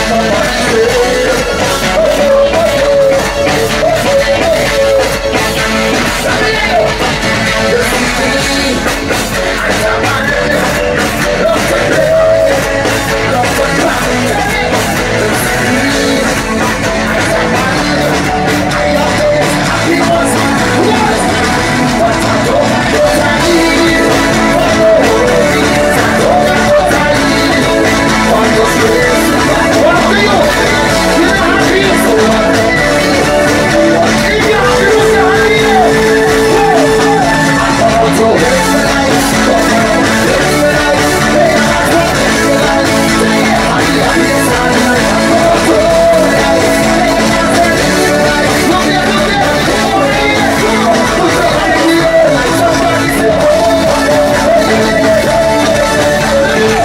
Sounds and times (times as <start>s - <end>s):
Crowd: 0.0s - 56.8s
Music: 0.0s - 56.8s.